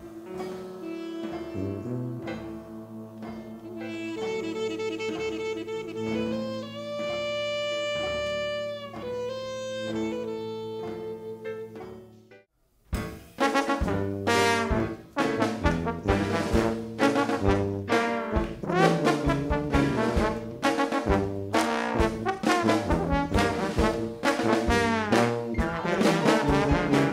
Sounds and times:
Jazz: 0:00.0 - 0:27.1
Orchestra: 0:00.0 - 0:27.1.

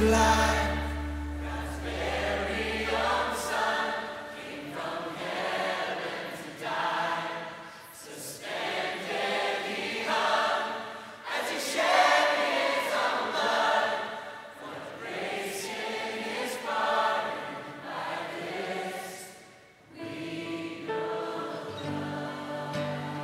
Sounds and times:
Choir: 0:00.0 - 0:23.2.

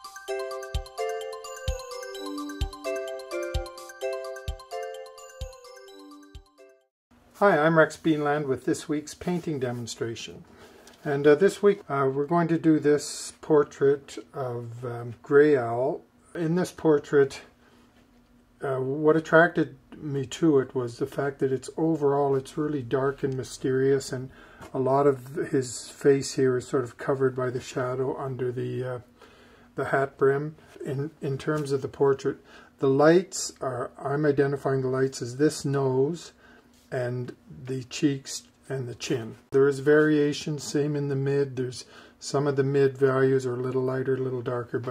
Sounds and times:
Speech: 0:07.4 - 0:17.6, 0:18.6 - 0:29.1, 0:29.8 - 0:44.9.

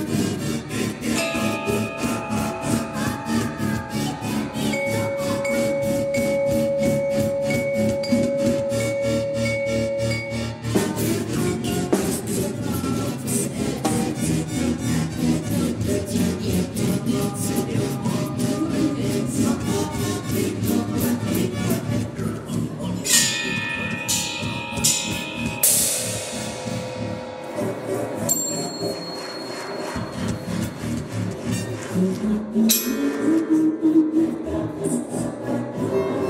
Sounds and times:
Percussion: 0:00.0 - 0:36.2.

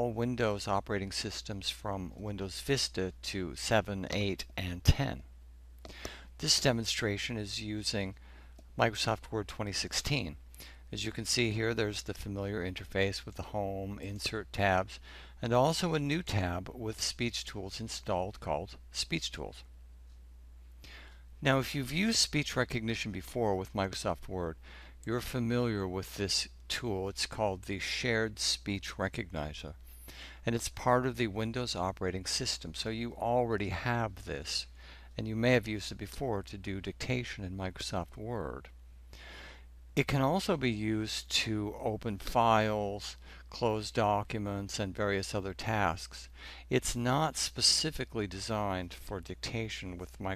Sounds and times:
Male speech, man speaking: 0:00.0 - 0:05.3, 0:06.4 - 0:08.2, 0:08.8 - 0:10.4, 0:11.0 - 0:19.6, 0:21.4 - 0:29.8, 0:30.5 - 0:38.7, 0:40.0 - 0:50.3.

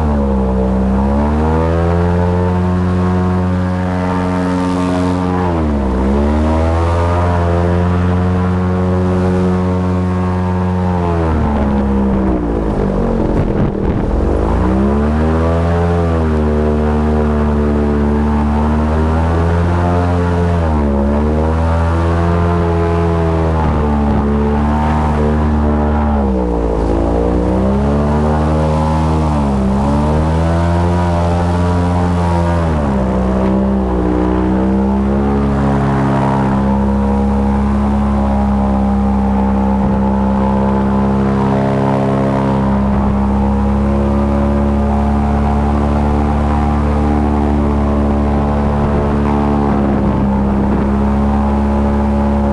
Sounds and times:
Motorboat, speedboat: 0:00.0 - 0:52.5.

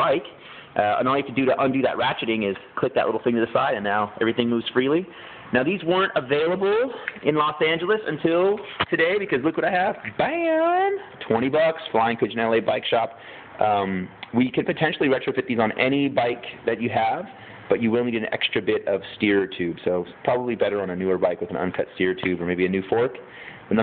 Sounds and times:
Speech: 0:00.0 - 0:23.8.

